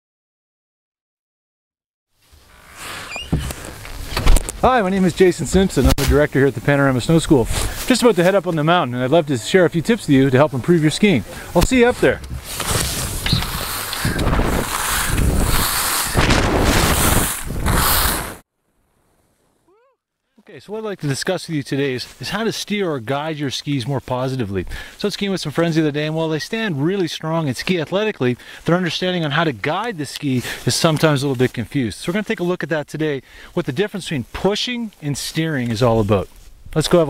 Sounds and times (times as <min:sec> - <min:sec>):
Speech: 0:04.6 - 0:12.2, 0:19.7 - 0:37.0.